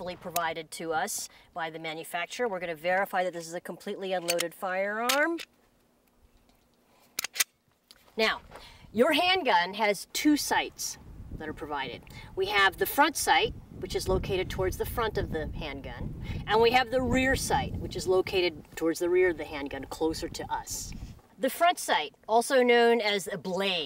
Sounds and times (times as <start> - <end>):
Speech: 0.0 - 5.5, 8.1 - 23.8
Outside, rural or natural: 0.0 - 23.8.